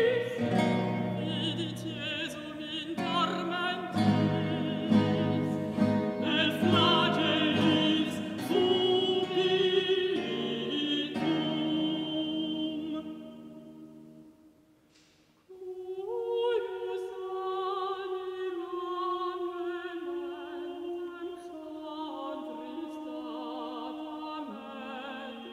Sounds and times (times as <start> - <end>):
Singing: 0.0 - 13.8, 15.5 - 25.5
Opera: 0.0 - 14.5, 15.4 - 25.5.